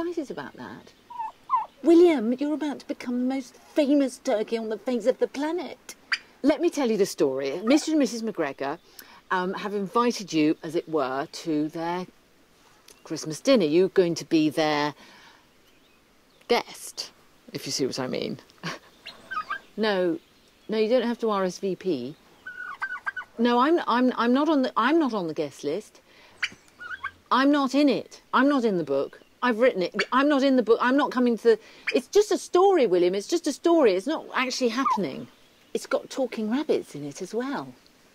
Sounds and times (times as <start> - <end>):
Gobble: 1.1 - 1.7, 19.0 - 19.6, 22.5 - 23.3, 26.4 - 27.2.